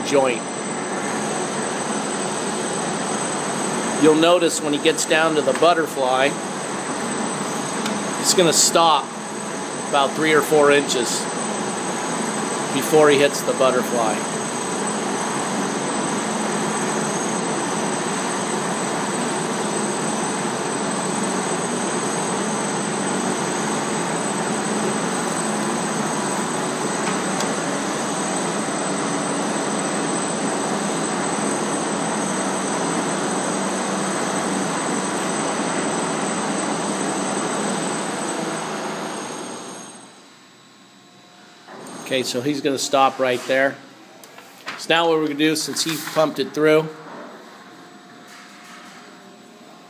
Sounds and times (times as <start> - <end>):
Speech: 0.0 - 0.5, 4.0 - 6.4, 8.2 - 9.1, 9.9 - 11.3, 12.7 - 14.3, 42.1 - 43.9, 44.8 - 47.0.